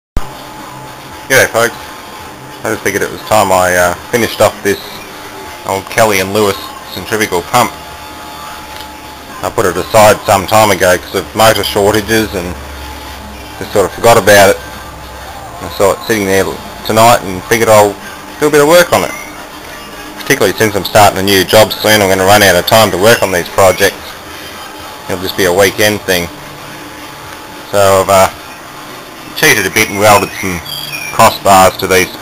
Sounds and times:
Speech: 1.3s - 1.8s, 2.6s - 5.0s, 5.6s - 7.8s, 9.4s - 12.6s, 13.6s - 14.6s, 15.6s - 19.2s, 20.2s - 24.0s, 25.1s - 26.3s, 27.7s - 28.4s, 29.4s - 32.2s.

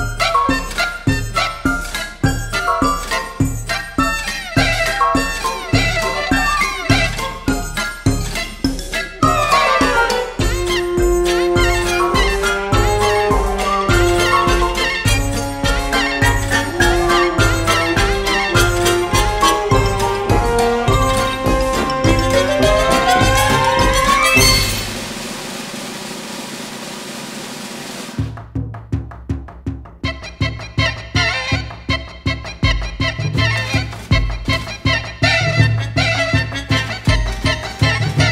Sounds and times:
Music: 0.0s - 26.9s, 27.5s - 38.3s.

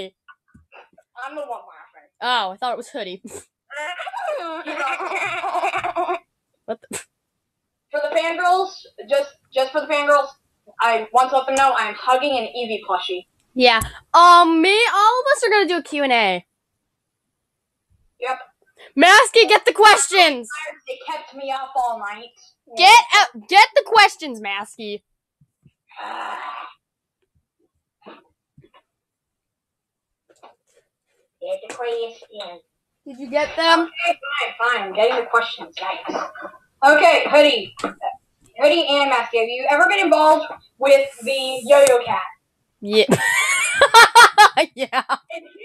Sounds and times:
Speech: 1.2s - 5.9s, 8.0s - 16.4s, 18.2s - 25.0s, 31.4s - 43.2s, 44.4s - 45.6s.

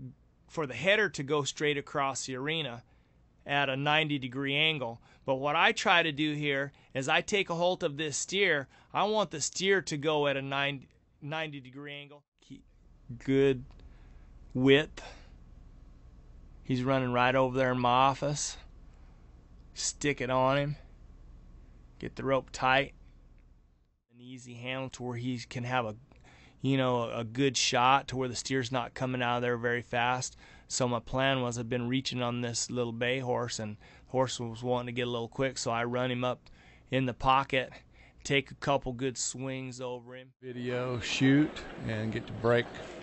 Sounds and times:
Speech: 0.0s - 2.8s, 3.4s - 13.7s, 14.6s - 15.2s, 16.7s - 18.6s, 19.8s - 20.8s, 22.0s - 22.9s, 24.2s - 26.0s, 26.6s - 42.8s.

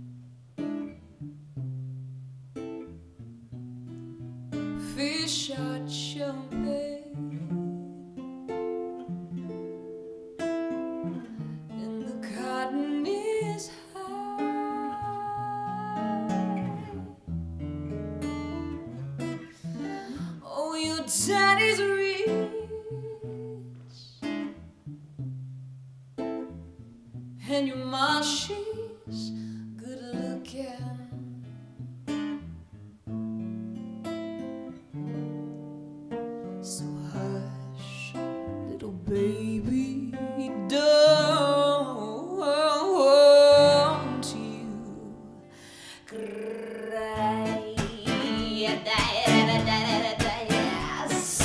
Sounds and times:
Guitar: 0.0s - 51.4s.

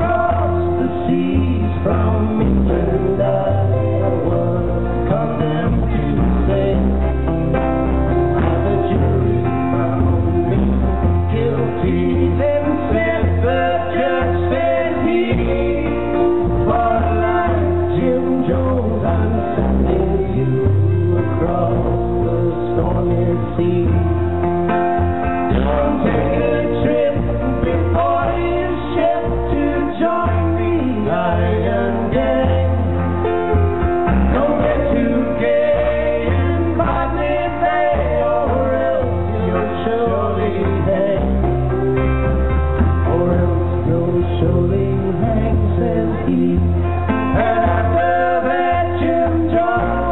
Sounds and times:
Music: 0.0s - 50.1s.

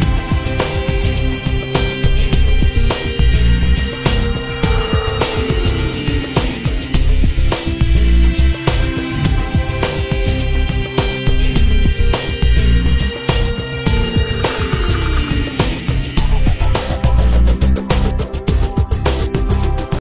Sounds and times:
Music: 0.0s - 20.0s.

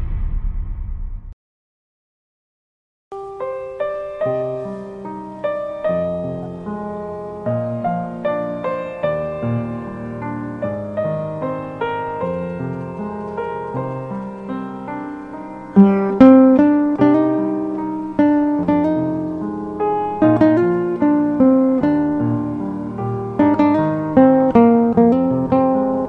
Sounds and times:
Acoustic guitar: 3.4s - 26.0s
Strum: 4.5s - 26.0s.

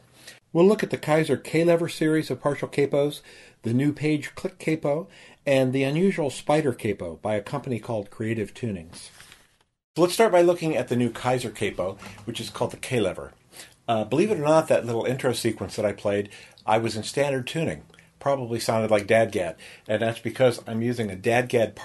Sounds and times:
Speech: 0.5s - 9.2s, 10.0s - 21.8s.

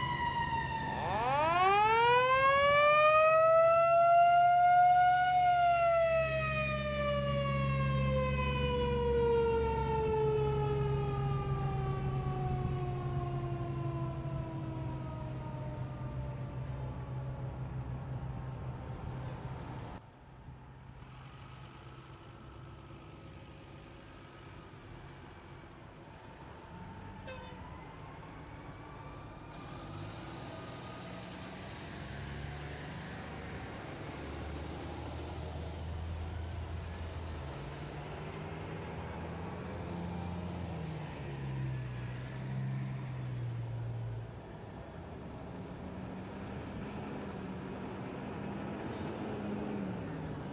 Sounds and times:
Siren: 0.0s - 18.4s, 26.2s - 44.5s
Outside, urban or manmade: 0.0s - 50.5s
Truck: 0.0s - 50.5s.

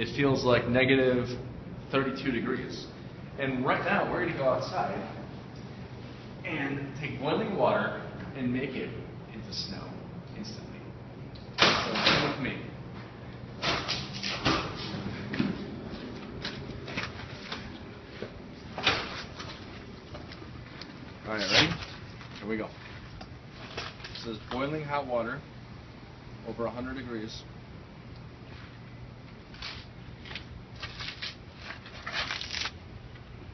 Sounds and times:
Speech: 0.0s - 5.2s, 6.4s - 10.9s, 11.8s - 12.7s, 21.2s - 21.8s, 22.4s - 22.8s, 24.2s - 25.5s, 26.4s - 27.5s.

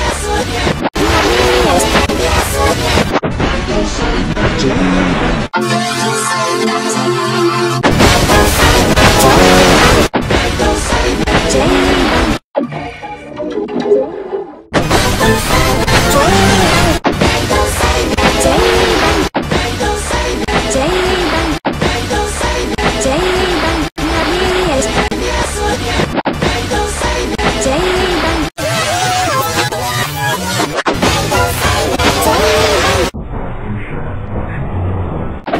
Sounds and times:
Music: 0.0s - 23.9s, 24.7s - 33.1s.

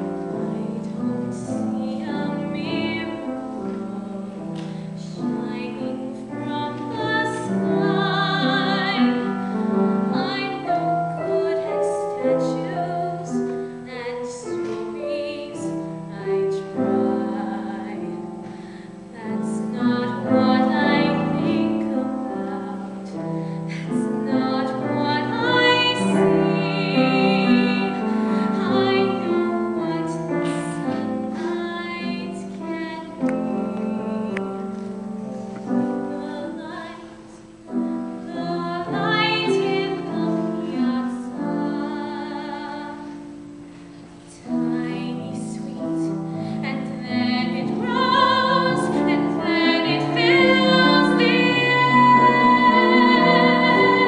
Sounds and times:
Music: 0.0s - 54.0s
Female singing: 0.4s - 4.4s, 5.0s - 18.3s, 19.2s - 34.6s, 37.8s - 43.2s, 44.3s - 54.0s.

